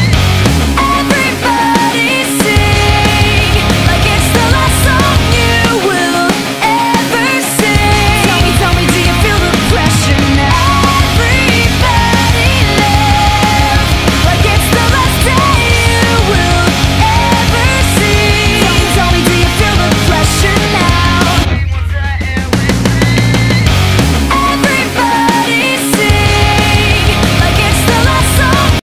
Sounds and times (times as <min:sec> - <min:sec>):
Music: 0:00.0 - 0:28.8.